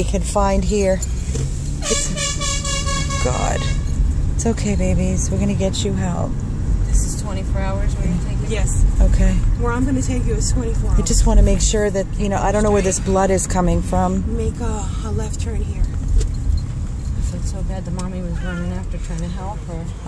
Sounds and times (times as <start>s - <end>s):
Car: 0.0s - 20.0s.